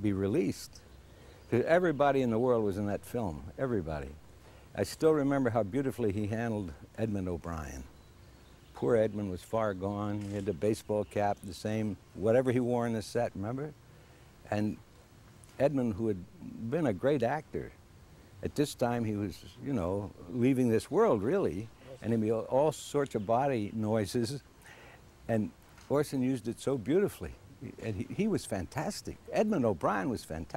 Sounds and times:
Speech: 0.0s - 0.8s, 1.5s - 4.2s, 4.8s - 7.9s, 8.8s - 13.8s, 14.5s - 14.8s, 15.6s - 17.8s, 18.4s - 24.4s, 25.3s - 30.5s.

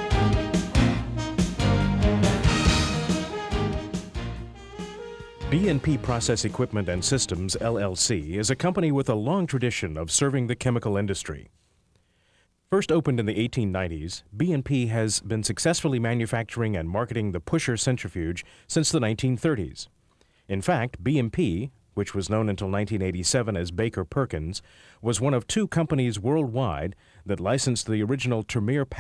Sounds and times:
Speech: 5.5s - 11.5s, 12.7s - 19.9s, 20.5s - 29.0s.

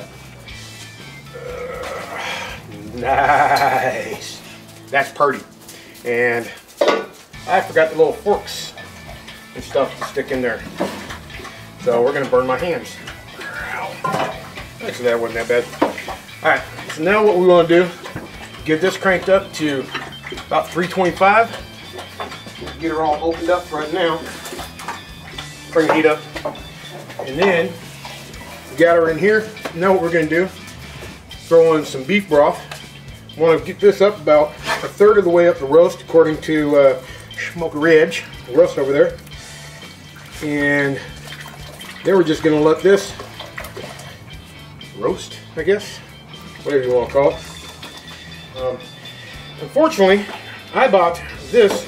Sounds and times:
Music: 0.0s - 51.8s
Speech: 3.0s - 6.6s, 7.5s - 8.8s, 9.6s - 10.7s, 11.8s - 14.0s, 14.8s - 15.7s, 16.4s - 18.0s, 18.6s - 19.9s, 20.5s - 21.6s, 22.7s - 24.3s, 25.7s - 26.2s, 27.2s - 27.8s, 28.7s - 30.6s, 31.4s - 32.6s, 33.4s - 39.2s, 40.4s - 41.1s, 42.1s - 43.2s, 45.0s - 46.0s, 46.6s - 47.4s, 49.6s - 51.8s.

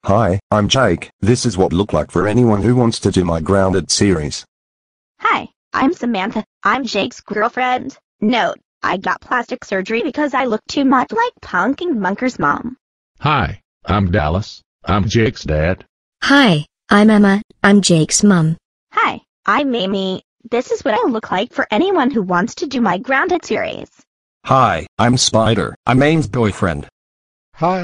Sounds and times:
Speech: 0.0s - 4.5s, 5.2s - 26.9s, 27.6s - 27.8s.

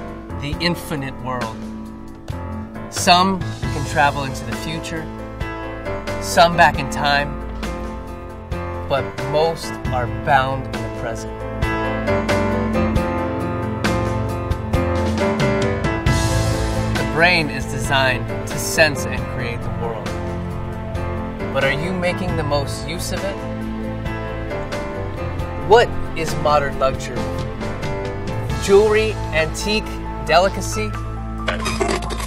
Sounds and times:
Music: 0.0s - 32.2s
Speech: 0.4s - 1.6s, 3.0s - 5.1s, 6.2s - 7.4s, 8.9s - 11.3s, 17.1s - 20.1s, 21.6s - 23.4s, 25.6s - 27.3s, 28.6s - 31.6s.

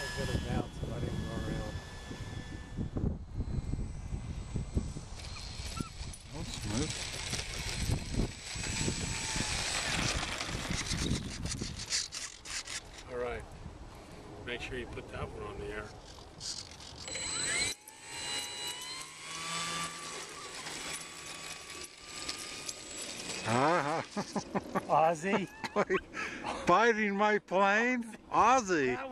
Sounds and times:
Speech: 0.0s - 1.7s, 14.5s - 15.9s, 26.7s - 29.1s.

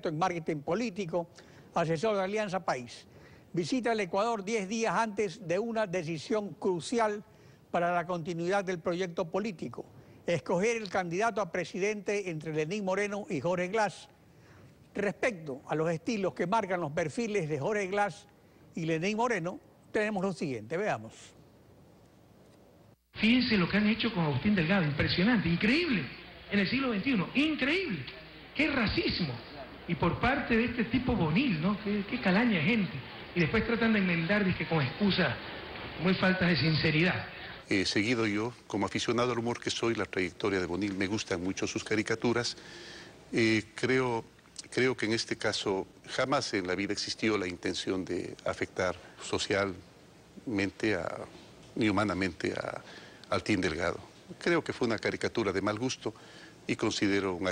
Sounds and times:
Speech: 0.0s - 14.1s, 15.0s - 21.4s, 23.2s - 35.4s, 36.0s - 42.6s, 43.3s - 57.5s.

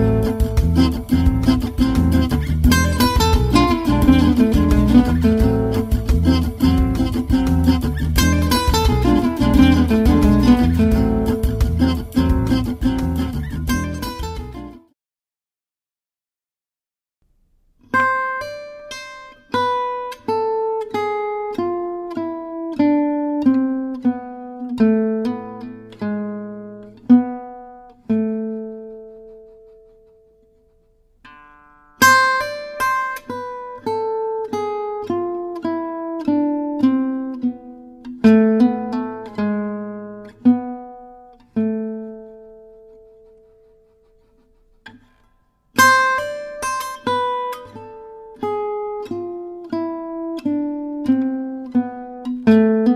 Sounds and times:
Guitar: 0.0s - 15.0s, 17.8s - 52.9s.

